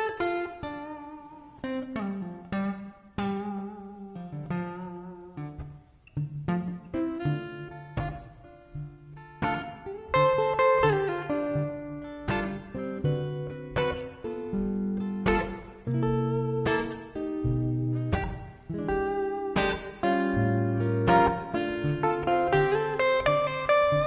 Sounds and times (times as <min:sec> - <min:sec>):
Music: 0:00.0 - 0:24.0.